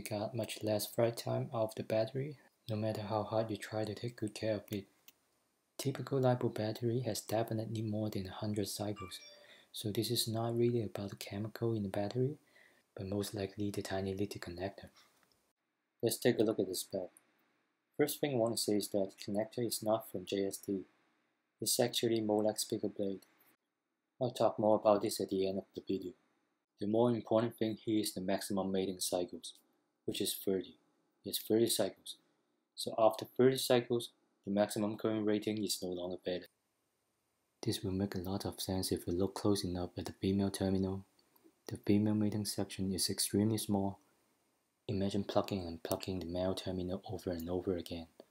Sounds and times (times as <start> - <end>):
Speech: 0.0 - 4.9, 5.8 - 12.4, 13.0 - 15.0, 16.0 - 17.1, 18.0 - 20.9, 21.6 - 23.2, 24.2 - 26.2, 26.8 - 32.2, 32.8 - 36.5, 37.6 - 41.1, 41.7 - 44.0, 44.9 - 48.2.